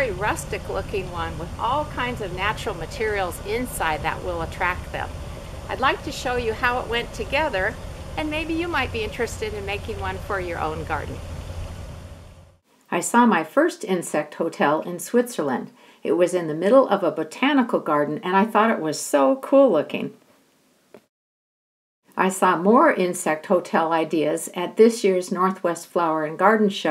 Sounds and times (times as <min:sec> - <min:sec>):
Speech: 0:00.0 - 0:05.1, 0:05.7 - 0:11.2, 0:12.9 - 0:20.1, 0:22.2 - 0:26.9.